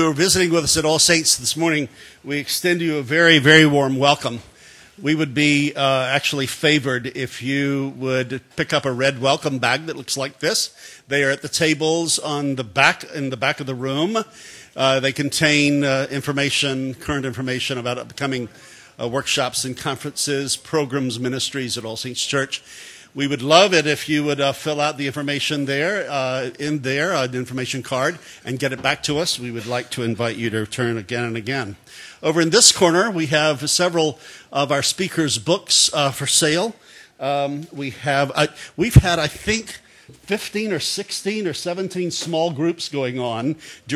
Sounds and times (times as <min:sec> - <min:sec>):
Speech: 0:00.0 - 0:22.6, 0:23.2 - 0:43.9.